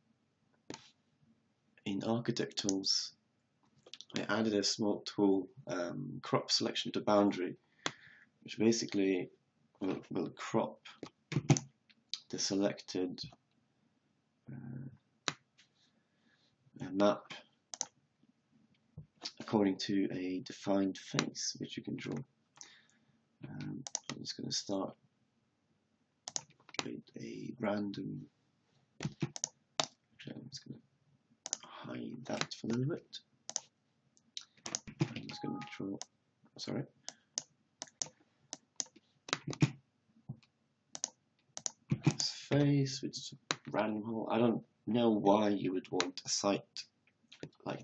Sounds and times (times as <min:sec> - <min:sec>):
Speech: 0:01.9 - 0:03.2, 0:04.0 - 0:07.6, 0:08.5 - 0:11.0, 0:12.2 - 0:13.4, 0:14.5 - 0:15.0, 0:16.8 - 0:17.4, 0:19.3 - 0:22.2, 0:23.4 - 0:25.0, 0:26.8 - 0:28.3, 0:30.2 - 0:30.8, 0:31.6 - 0:33.2, 0:35.1 - 0:36.0, 0:36.6 - 0:36.9, 0:42.0 - 0:47.8.